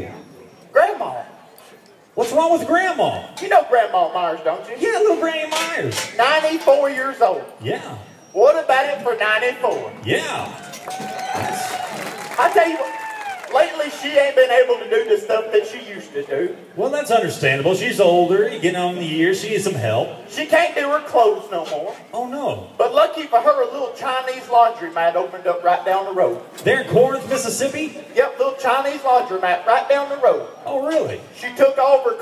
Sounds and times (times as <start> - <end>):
Speech: 0.0 - 1.4, 2.2 - 10.6, 12.4 - 12.9, 13.5 - 32.2
Outside, urban or manmade: 0.0 - 32.2.